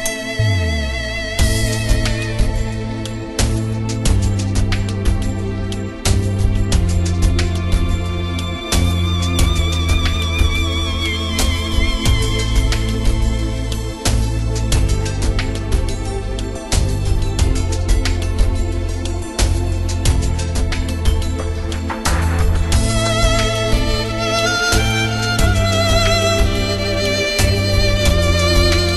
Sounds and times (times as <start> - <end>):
Soul music: 0.0 - 28.9.